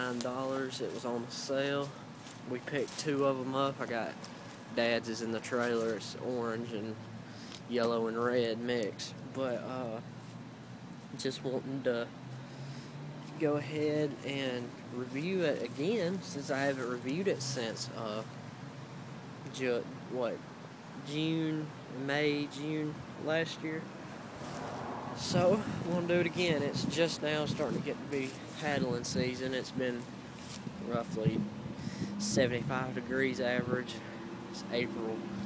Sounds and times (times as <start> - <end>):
Speech: 0.0 - 4.2, 4.8 - 7.0, 7.7 - 10.1, 11.1 - 12.1, 13.4 - 18.3, 19.5 - 20.4, 21.0 - 23.9, 25.2 - 30.1, 30.8 - 31.5, 32.2 - 35.2.